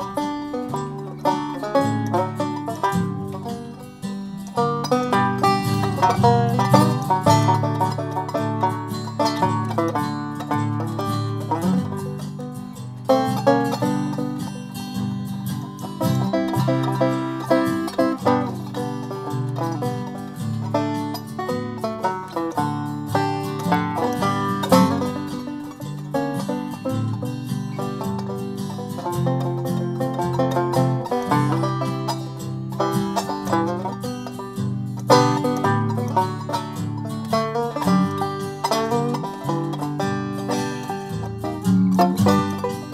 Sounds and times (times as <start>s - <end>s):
Banjo: 0.0s - 42.9s
Bluegrass: 0.0s - 42.9s.